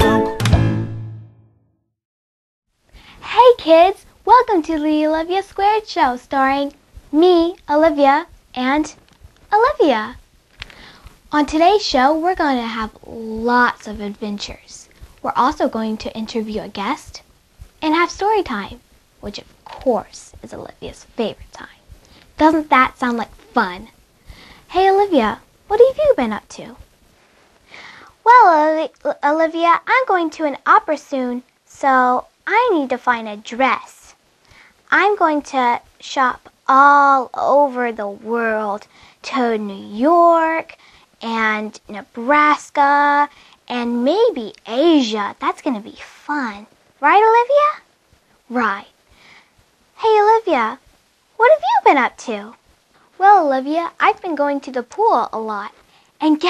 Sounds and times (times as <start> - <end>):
Speech: 3.2 - 10.2, 11.3 - 17.2, 17.8 - 21.8, 22.4 - 24.0, 24.7 - 26.8, 28.2 - 34.2, 34.9 - 47.9, 48.5 - 48.9, 50.0 - 50.8, 51.4 - 52.6, 53.2 - 56.5.